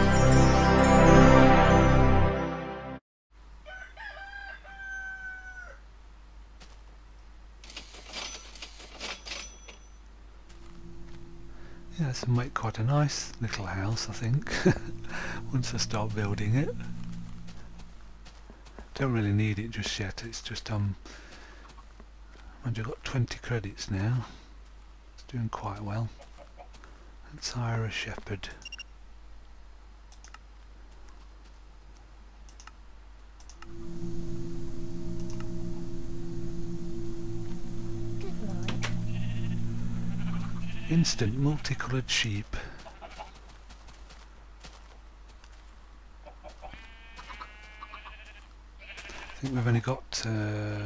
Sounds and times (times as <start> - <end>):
Speech: 11.9 - 14.5, 15.5 - 16.8, 19.0 - 21.0, 22.6 - 24.3, 25.2 - 26.1, 27.3 - 28.6, 40.9 - 42.8, 49.4 - 50.8.